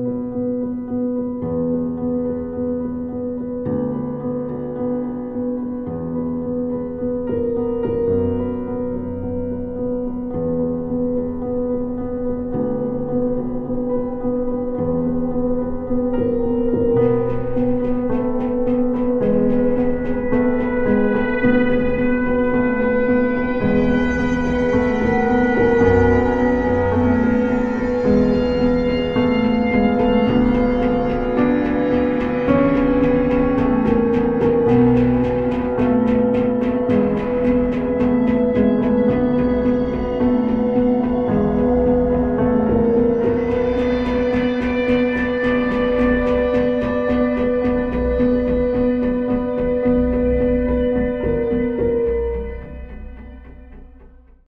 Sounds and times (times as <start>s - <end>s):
Music: 0.0s - 54.4s.